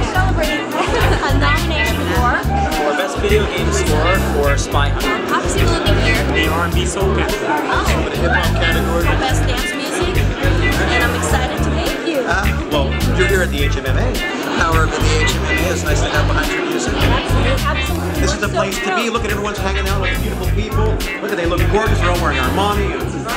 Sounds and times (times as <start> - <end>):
Music: 0.0 - 23.3
Speech: 0.0 - 23.3.